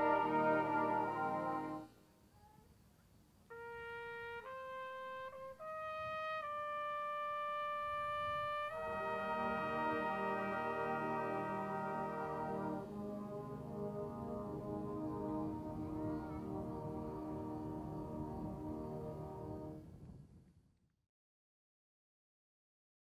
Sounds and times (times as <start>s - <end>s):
French horn: 0.0s - 2.0s, 3.5s - 19.9s.